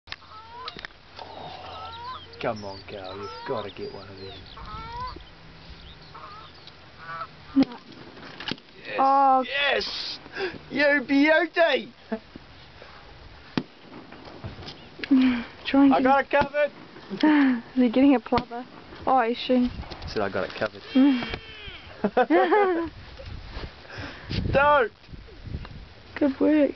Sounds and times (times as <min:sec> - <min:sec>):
Honk: 0:06.2 - 0:07.3.